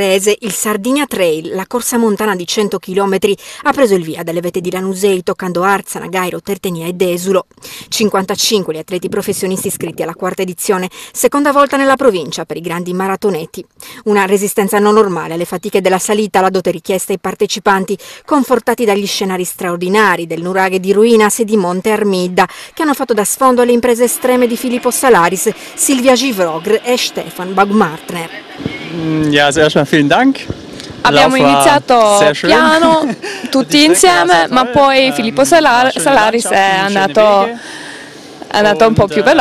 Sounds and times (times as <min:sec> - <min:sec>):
Speech: 0:00.0 - 0:30.4, 0:31.0 - 0:37.6, 0:38.5 - 0:39.4
Outside, urban or manmade: 0:00.0 - 0:39.4.